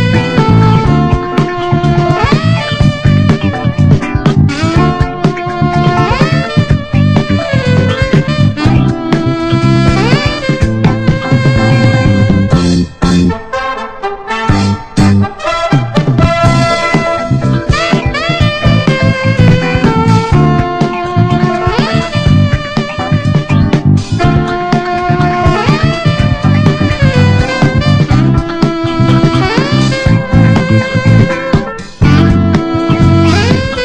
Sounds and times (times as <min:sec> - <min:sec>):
Brass instrument: 0:00.0 - 0:33.8
Funk: 0:00.0 - 0:33.8.